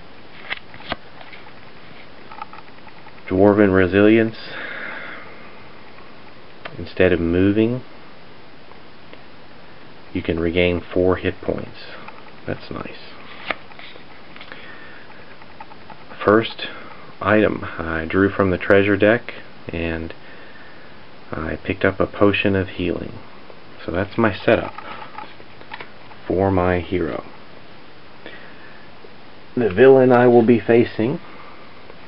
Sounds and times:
Speech: 0:03.3 - 0:04.6, 0:06.7 - 0:07.9, 0:10.1 - 0:13.2, 0:16.2 - 0:20.2, 0:21.3 - 0:23.2, 0:23.8 - 0:24.8, 0:26.2 - 0:27.3, 0:29.6 - 0:31.2.

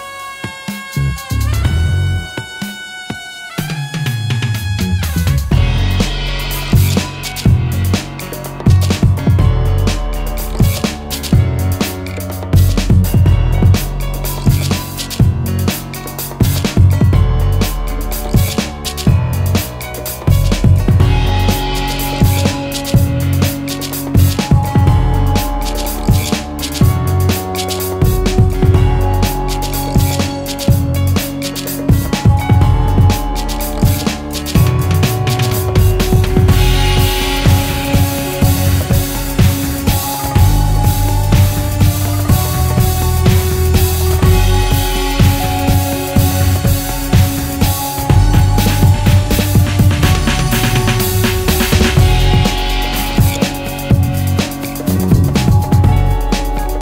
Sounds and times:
Music: 0:00.0 - 0:56.8.

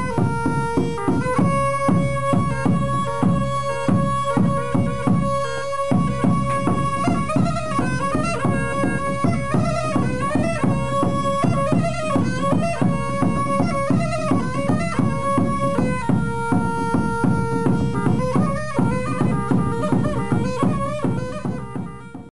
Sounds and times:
Music: 0:00.0 - 0:22.3.

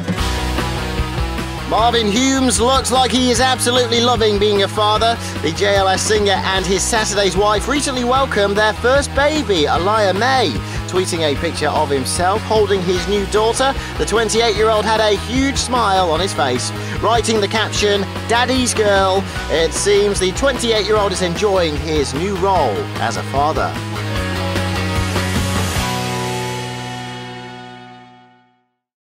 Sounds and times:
Music: 0:00.0 - 0:28.9
Speech: 0:01.7 - 0:23.8.

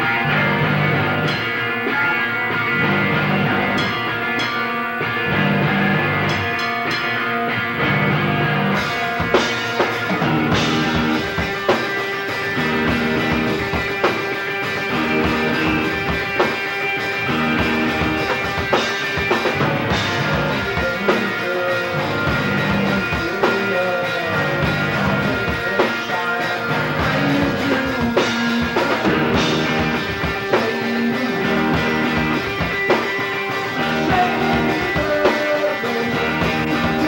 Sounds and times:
Music: 0:00.0 - 0:37.0.

